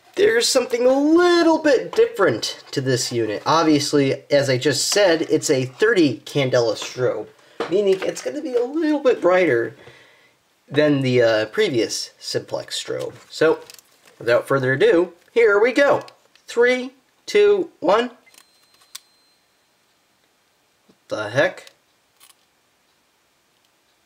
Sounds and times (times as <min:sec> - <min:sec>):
Speech: 0:00.2 - 0:09.8, 0:10.7 - 0:18.2, 0:21.1 - 0:21.8.